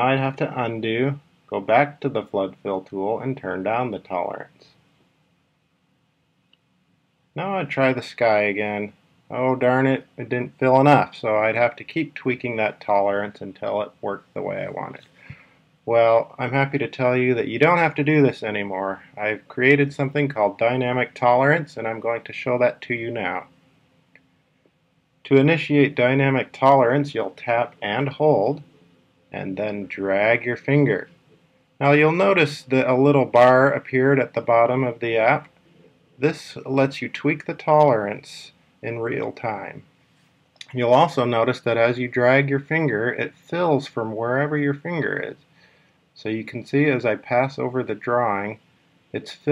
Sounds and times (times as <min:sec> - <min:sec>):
Speech: 0:00.0 - 0:04.8, 0:07.4 - 0:15.1, 0:15.9 - 0:23.5, 0:25.2 - 0:28.7, 0:29.3 - 0:31.2, 0:31.8 - 0:35.5, 0:36.2 - 0:39.8, 0:40.6 - 0:45.4, 0:46.2 - 0:49.5.